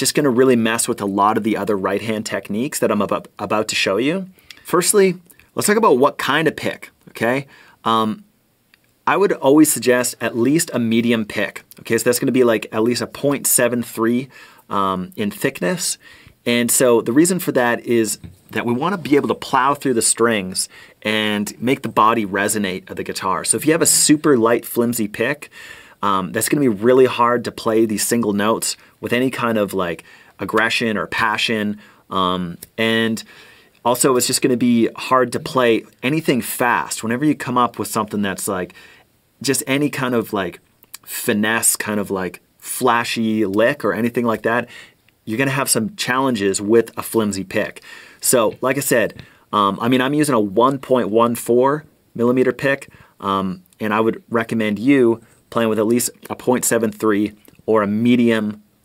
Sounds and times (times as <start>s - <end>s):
Speech: 0.0s - 8.3s, 9.1s - 38.8s, 39.4s - 58.7s.